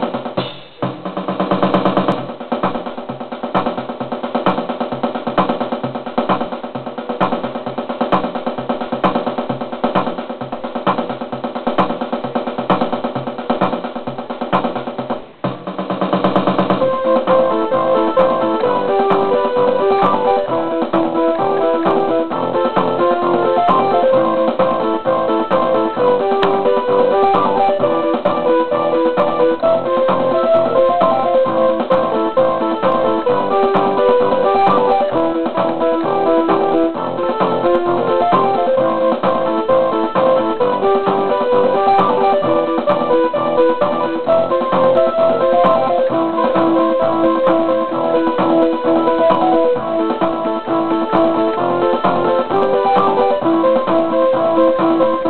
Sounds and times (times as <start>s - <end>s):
Techno: 0.0s - 55.2s.